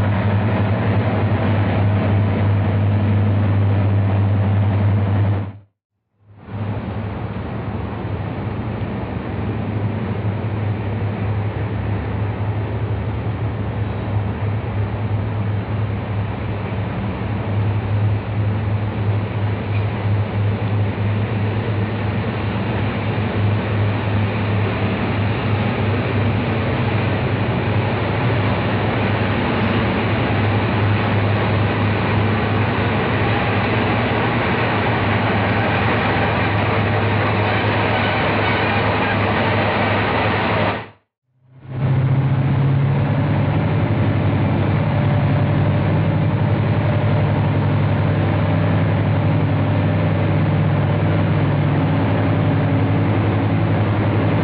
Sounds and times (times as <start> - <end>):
Railroad car, train wagon: 0.0 - 54.4
Train: 0.0 - 54.4.